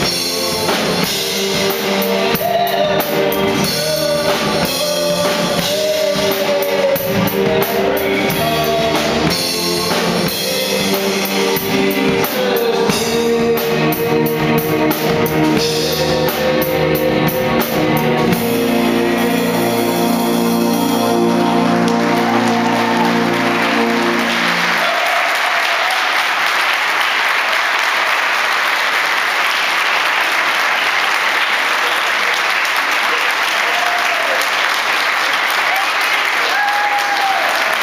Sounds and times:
Applause: 21.8 - 37.8.

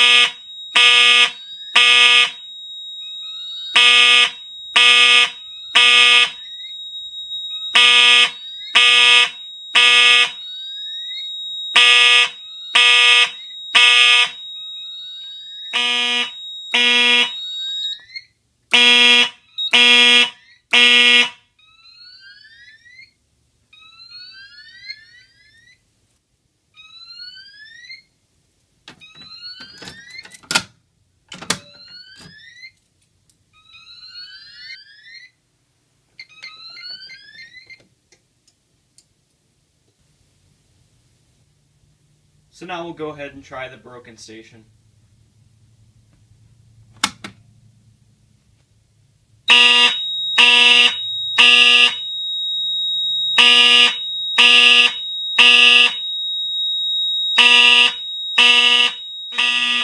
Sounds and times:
Fire alarm: 0.0 - 25.8, 26.8 - 28.2, 29.0 - 30.3, 31.4 - 32.8, 33.5 - 35.4, 36.2 - 37.8, 49.4 - 59.8.

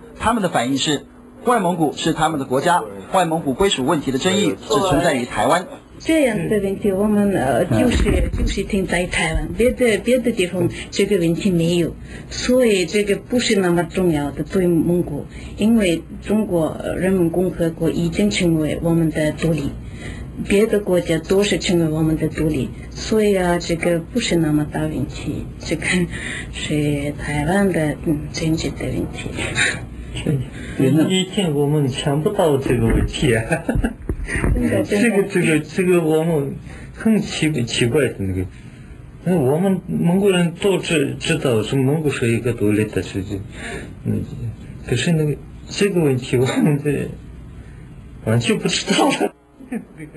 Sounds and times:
Conversation: 0.0 - 50.1.

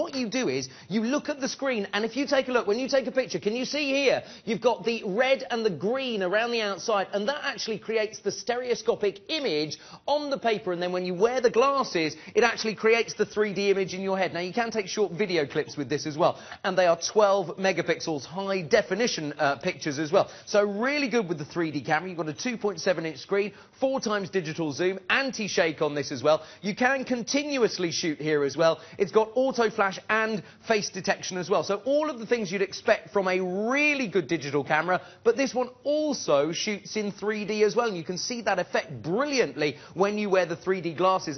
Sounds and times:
Speech: 0.0 - 41.3.

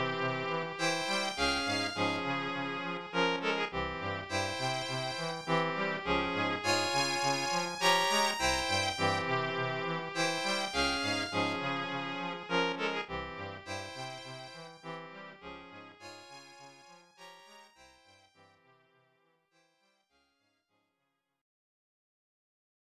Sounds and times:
Music: 0.0 - 21.0.

